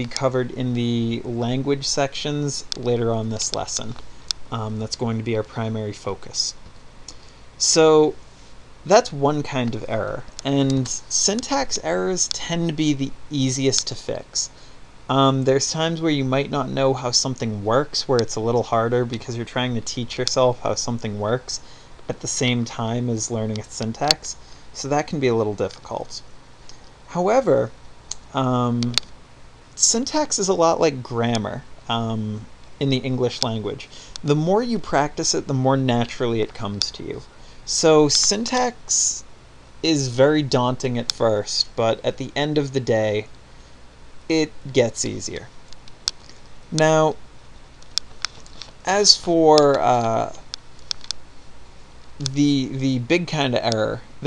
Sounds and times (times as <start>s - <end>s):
Speech: 0.0s - 6.6s, 7.6s - 8.2s, 8.9s - 26.3s, 27.1s - 29.0s, 29.8s - 43.3s, 44.3s - 45.5s, 46.7s - 47.2s, 48.8s - 50.4s, 52.2s - 54.2s.